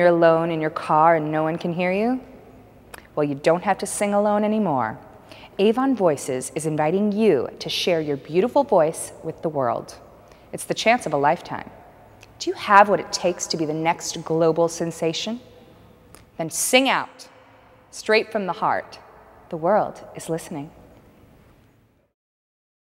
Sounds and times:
Speech: 19.6 - 20.8.

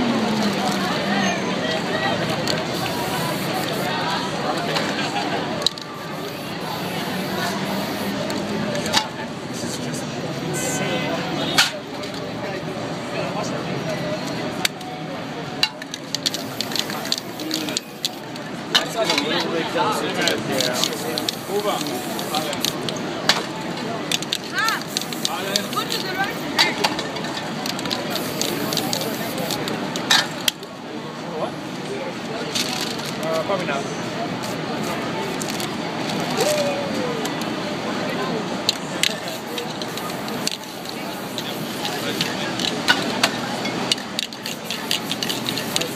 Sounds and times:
Spray: 2.4 - 4.0, 6.0 - 8.3, 16.2 - 18.3, 20.5 - 22.8, 24.5 - 26.4, 27.7 - 29.7, 39.0 - 45.9
Speech: 16.6 - 30.0, 30.7 - 45.9.

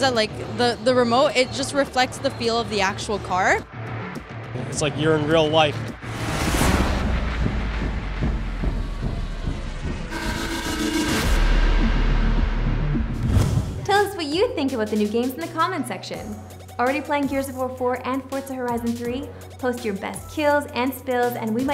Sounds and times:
Music: 0.0 - 21.7
Speech: 4.6 - 5.9, 13.9 - 21.7.

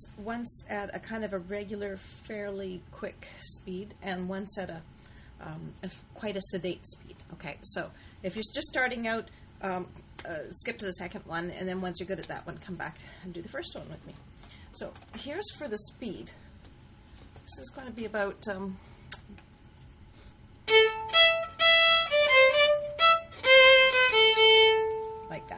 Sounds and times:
Speech: 0.0 - 14.2, 14.8 - 16.4, 17.5 - 18.8, 25.3 - 25.5
Violin, fiddle: 20.7 - 25.3.

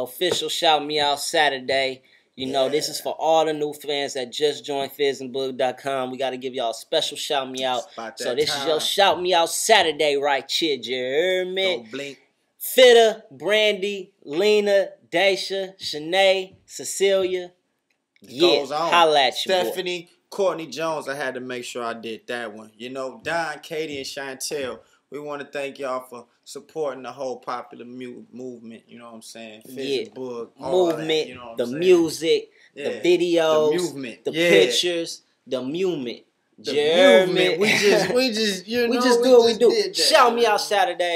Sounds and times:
Speech: 0.0 - 17.5, 18.3 - 41.1.

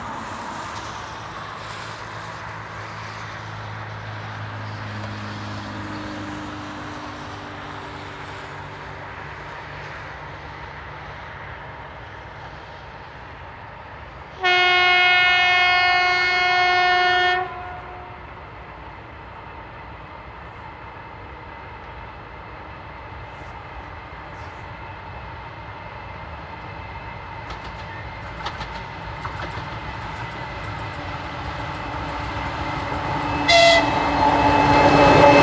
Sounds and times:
Train horn: 14.4 - 18.3, 32.6 - 35.4.

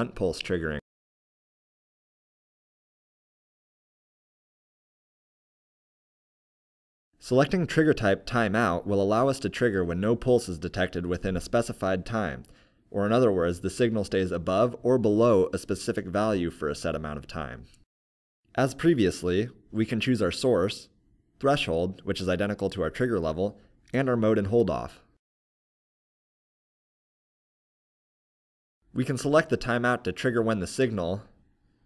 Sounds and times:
Speech: 0.0 - 0.9, 7.2 - 17.8, 18.5 - 25.2, 28.9 - 31.4.

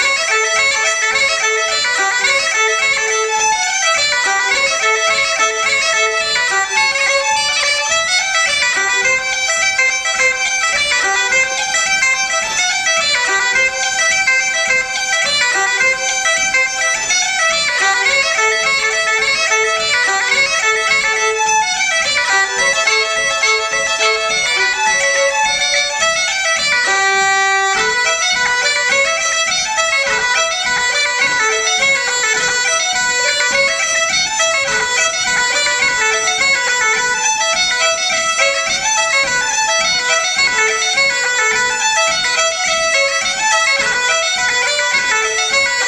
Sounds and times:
Bagpipes: 0.0 - 45.8
Wind instrument, woodwind instrument: 0.0 - 45.8.

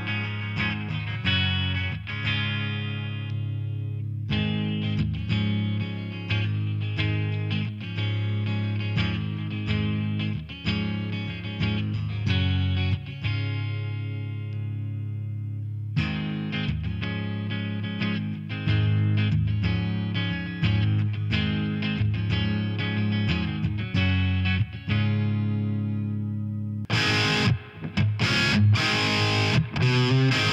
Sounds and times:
Electric guitar: 0.0 - 30.5
Strum: 0.0 - 30.5.

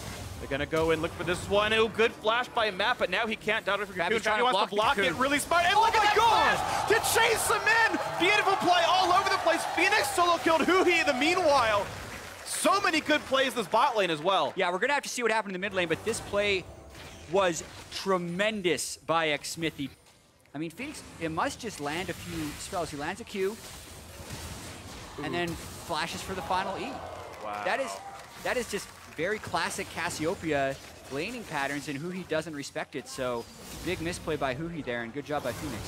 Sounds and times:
Speech: 0.4 - 11.9, 12.5 - 16.6, 17.3 - 20.0, 20.6 - 23.6, 25.2 - 35.8.

